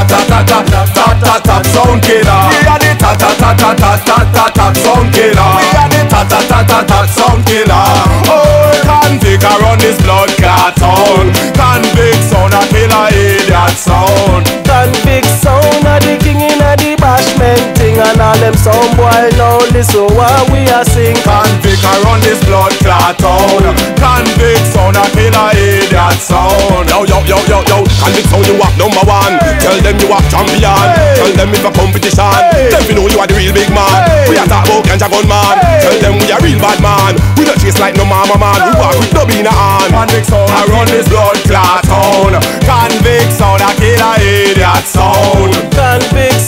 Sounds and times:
Music: 0.0s - 46.4s.

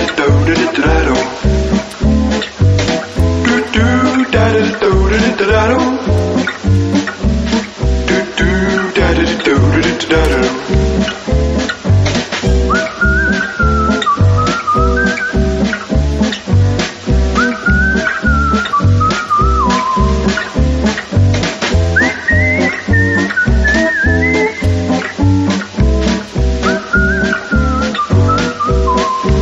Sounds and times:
Music: 0.0s - 29.4s.

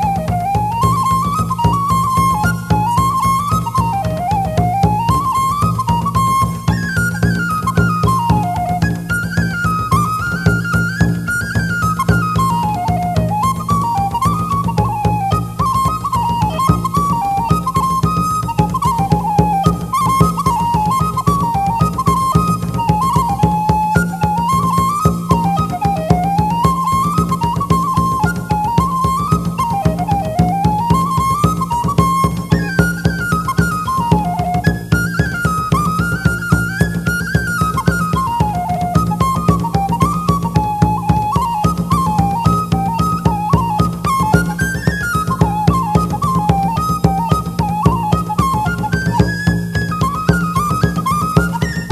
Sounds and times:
Music: 0.0s - 51.9s.

